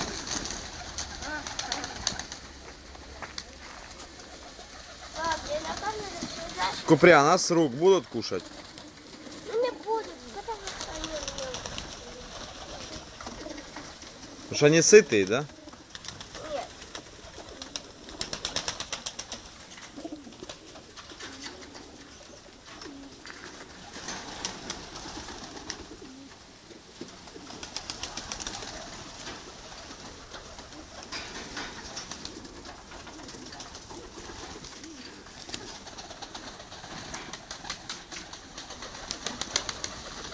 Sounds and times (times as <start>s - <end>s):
Pigeon, dove: 0.0s - 6.9s, 8.1s - 14.7s, 15.4s - 40.3s.